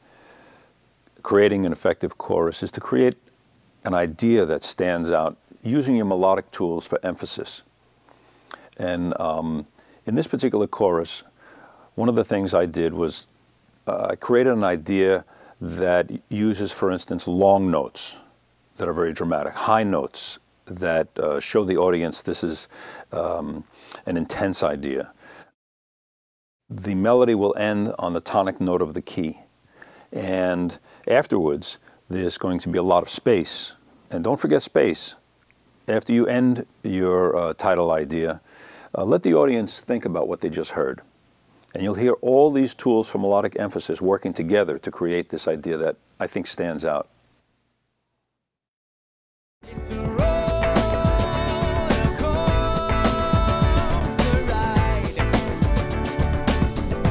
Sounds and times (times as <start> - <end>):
Speech: 1.2 - 3.2, 3.8 - 7.7, 8.8 - 11.3, 12.0 - 25.2, 26.7 - 29.5, 30.1 - 35.2, 35.9 - 41.1, 41.7 - 47.1.